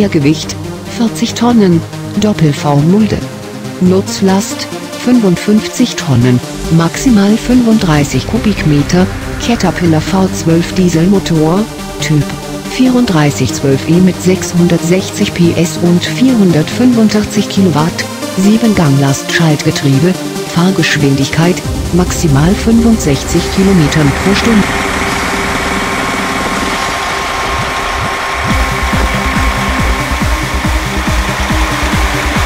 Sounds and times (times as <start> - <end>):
Speech: 0.0 - 24.8
Music: 0.0 - 32.4.